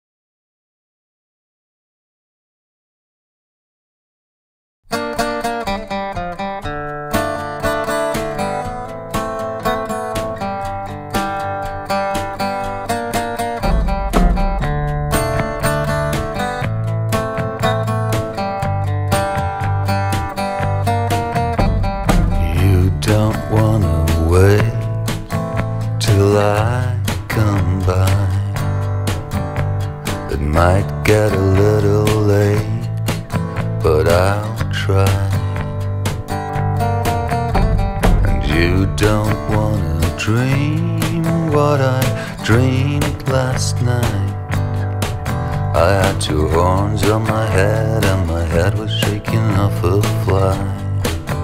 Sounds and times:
Acoustic guitar: 0:04.9 - 0:51.4.

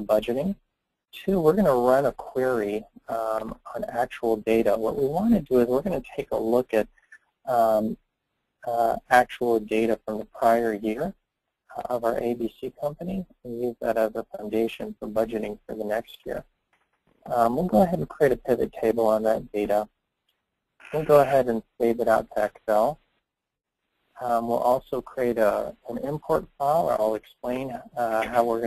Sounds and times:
Speech: 0:00.0 - 0:06.9, 0:07.5 - 0:08.0, 0:08.6 - 0:16.4, 0:17.2 - 0:19.9, 0:20.8 - 0:23.0, 0:24.2 - 0:28.6.

